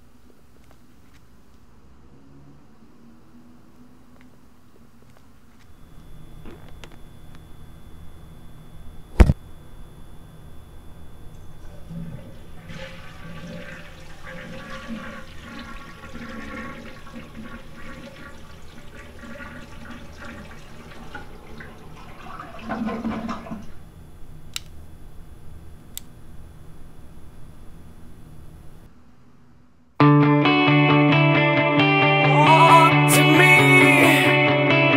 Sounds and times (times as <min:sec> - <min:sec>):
Water: 0:11.4 - 0:23.8.